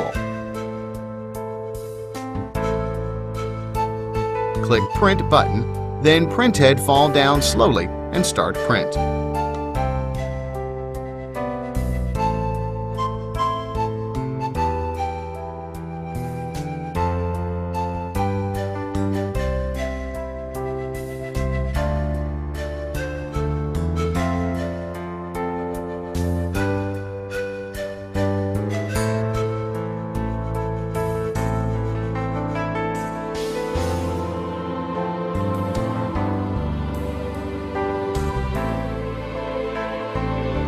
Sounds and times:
Music: 0:00.0 - 0:40.6.

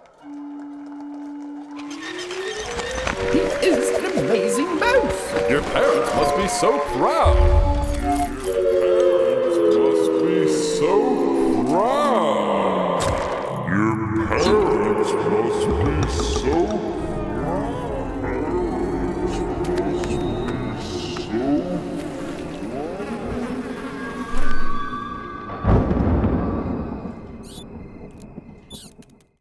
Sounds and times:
Mouse: 0:27.4 - 0:27.7, 0:28.7 - 0:29.0.

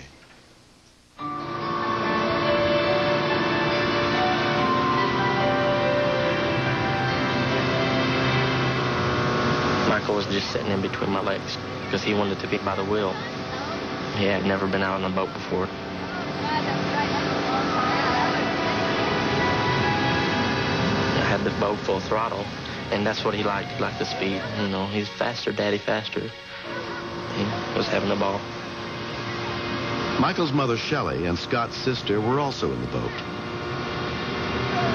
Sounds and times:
Music: 0:01.2 - 0:09.3, 0:16.1 - 0:30.4
Vehicle: 0:01.2 - 0:34.9.

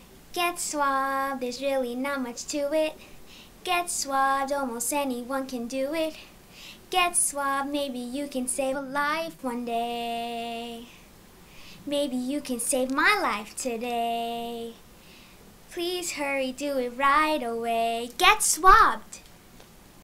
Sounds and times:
Speech: 0:18.1 - 0:19.2.

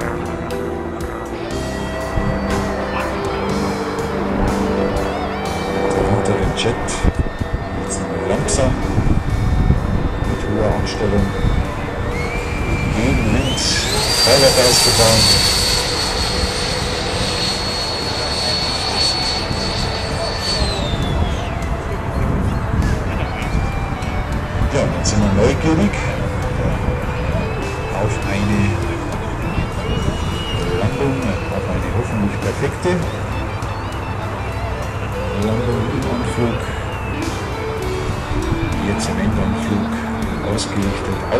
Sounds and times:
Fixed-wing aircraft, airplane: 0:00.0 - 0:41.3
Music: 0:00.0 - 0:41.3
Outside, rural or natural: 0:00.0 - 0:41.3
Speech: 0:05.9 - 0:07.2, 0:07.8 - 0:09.0, 0:10.3 - 0:11.5, 0:12.9 - 0:15.4, 0:20.2 - 0:23.8, 0:24.6 - 0:26.5, 0:27.9 - 0:33.2, 0:35.3 - 0:36.7, 0:38.8 - 0:41.3.

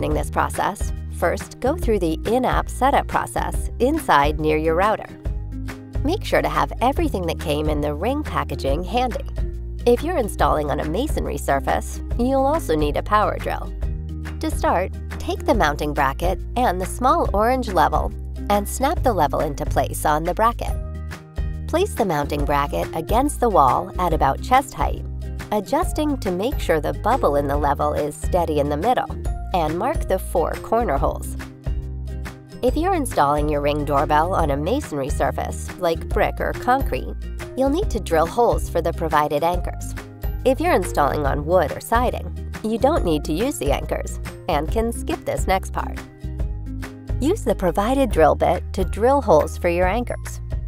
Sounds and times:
Speech: 0:00.0 - 0:05.2, 0:06.1 - 0:09.2, 0:09.9 - 0:13.7, 0:14.4 - 0:20.8, 0:21.8 - 0:31.4, 0:32.6 - 0:39.9, 0:40.5 - 0:46.0, 0:47.2 - 0:50.4
Music: 0:00.0 - 0:50.6.

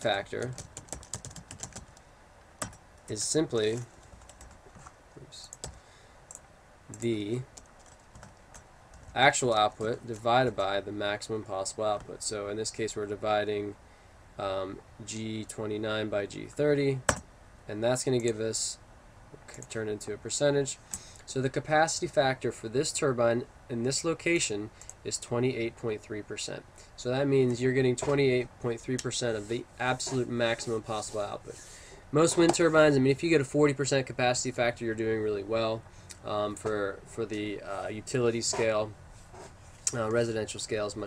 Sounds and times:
Speech: 0:00.0 - 0:00.6, 0:03.1 - 0:03.9, 0:05.2 - 0:05.6, 0:06.9 - 0:07.5, 0:09.2 - 0:13.8, 0:14.4 - 0:17.1, 0:17.7 - 0:18.8, 0:19.4 - 0:39.0, 0:39.9 - 0:41.0
Computer keyboard: 0:00.4 - 0:02.0, 0:03.7 - 0:04.9, 0:05.5 - 0:09.2.

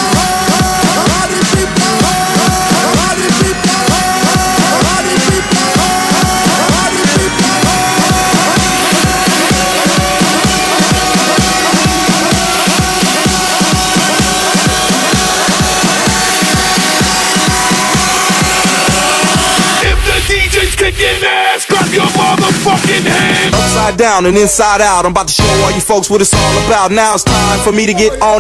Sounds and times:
Music: 0:00.0 - 0:28.4.

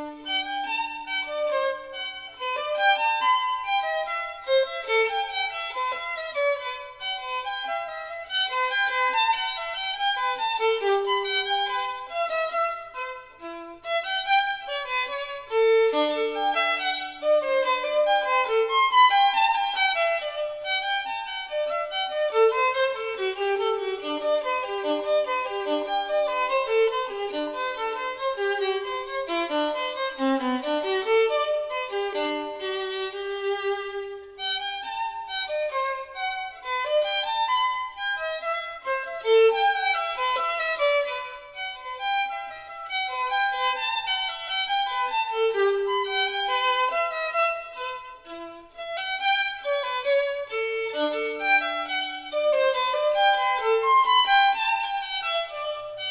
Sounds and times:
Violin, fiddle: 0:00.0 - 0:56.1.

